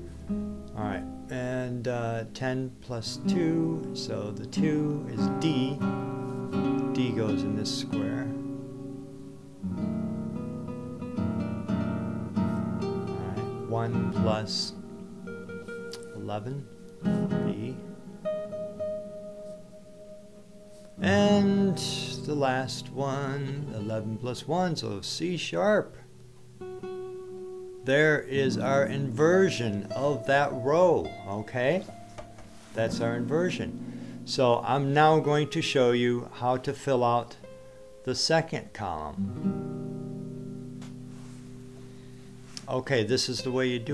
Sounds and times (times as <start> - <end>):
Guitar: 0.0 - 43.9
Speech: 0.8 - 5.8, 6.9 - 8.4, 13.2 - 14.8, 16.0 - 16.7, 17.3 - 17.9, 21.0 - 26.0, 27.9 - 31.9, 32.8 - 33.7, 34.3 - 37.4, 38.0 - 39.2, 42.6 - 43.9.